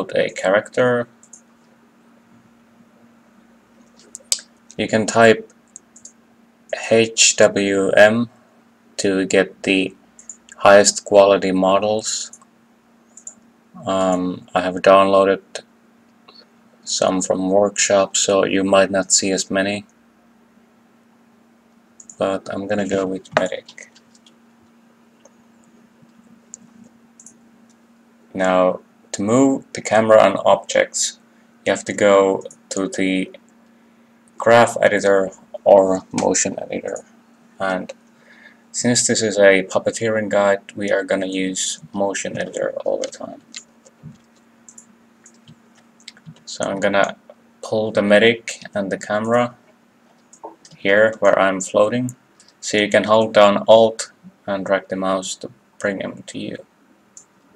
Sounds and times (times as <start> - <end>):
Speech: 0.0 - 1.2, 4.4 - 5.5, 6.7 - 8.4, 9.0 - 12.4, 13.8 - 15.7, 16.3 - 19.9, 22.1 - 24.0, 28.3 - 33.4, 34.4 - 38.0, 38.7 - 43.6, 46.1 - 49.6, 50.4 - 56.7.